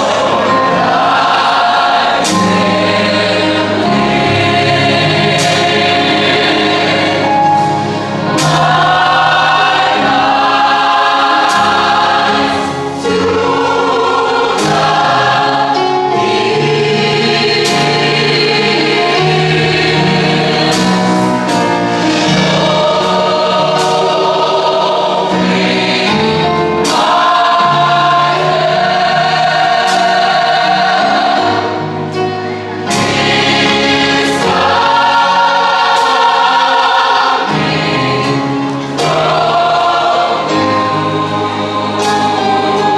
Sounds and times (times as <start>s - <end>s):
Choir: 0.0s - 42.9s.